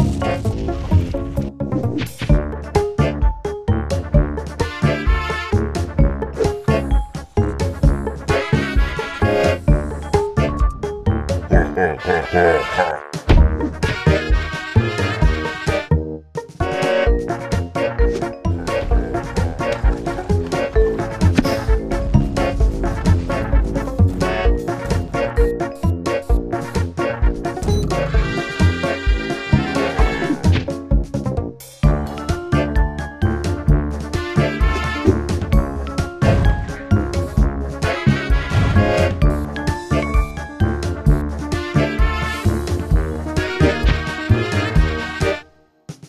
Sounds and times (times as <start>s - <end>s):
Music: 0.0s - 46.0s.